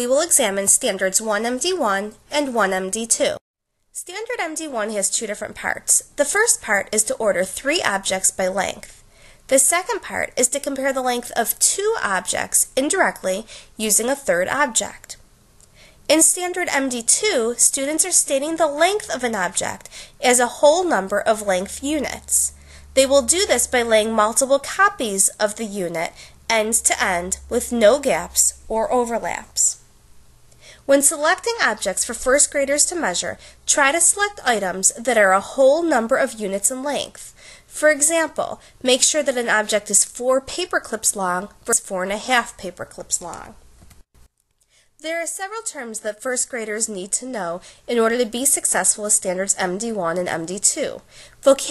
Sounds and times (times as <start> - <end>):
Narration, monologue: 0.0 - 51.7.